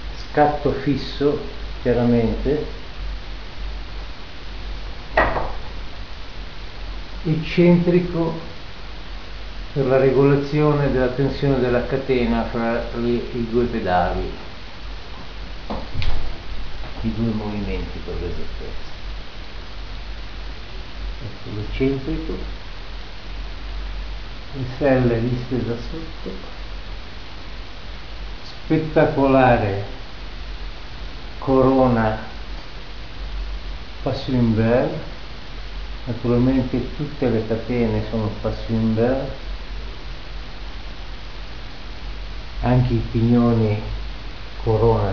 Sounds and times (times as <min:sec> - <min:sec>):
Speech: 0:00.2 - 0:02.8, 0:07.2 - 0:08.6, 0:09.8 - 0:14.5, 0:17.0 - 0:19.0, 0:21.2 - 0:22.5, 0:24.5 - 0:26.5, 0:28.4 - 0:30.0, 0:31.4 - 0:32.4, 0:34.0 - 0:35.2, 0:36.0 - 0:39.4, 0:42.6 - 0:44.0, 0:44.6 - 0:45.1.